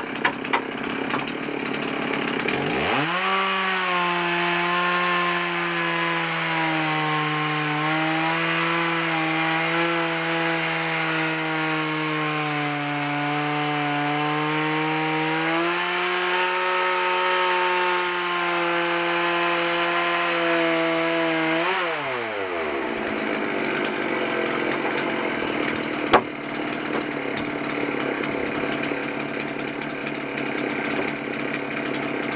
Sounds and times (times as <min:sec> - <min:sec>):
Wood: 0:00.0 - 0:12.4, 0:19.6 - 0:32.3
Sawing: 0:00.0 - 0:32.3.